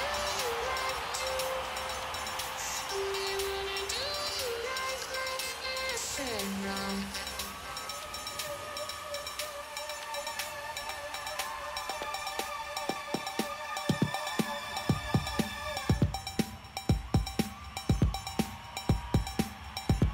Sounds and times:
Soundtrack music: 0:00.0 - 0:20.1
Video game music: 0:00.0 - 0:20.1.

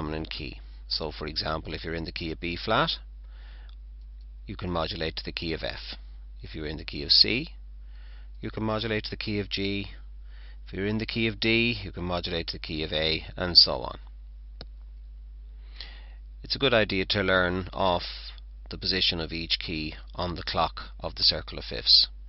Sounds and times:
Speech: 0:00.0 - 0:03.1, 0:04.5 - 0:07.6, 0:08.4 - 0:10.0, 0:10.7 - 0:14.1, 0:16.4 - 0:22.2.

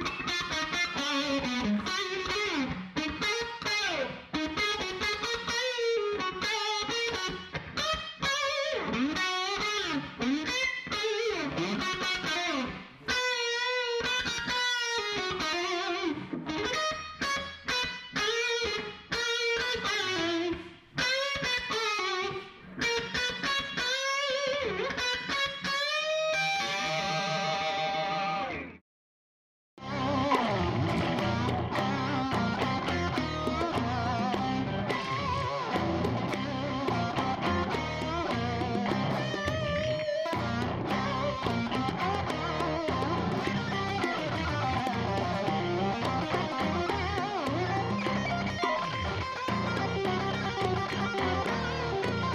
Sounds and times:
Music: 0:00.0 - 0:28.8, 0:29.8 - 0:52.3.

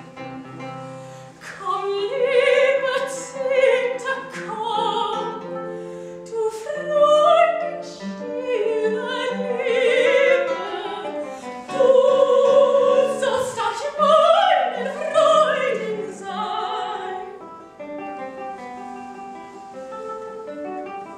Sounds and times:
Opera: 0:00.0 - 0:18.2, 0:18.8 - 0:21.1.

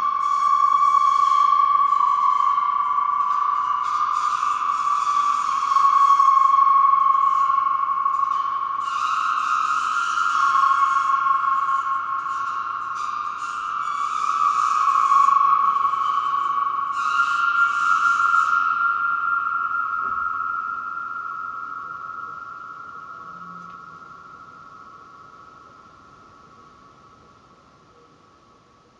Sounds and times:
Sonar: 0:00.0 - 0:28.9.

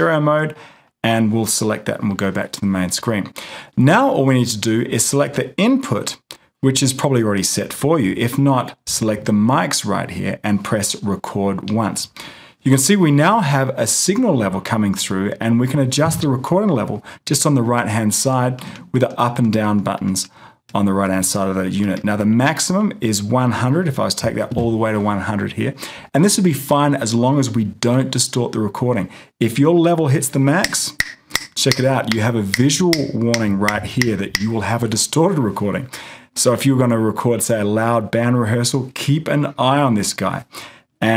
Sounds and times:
Speech: 0:00.0 - 0:31.0, 0:31.6 - 0:41.1.

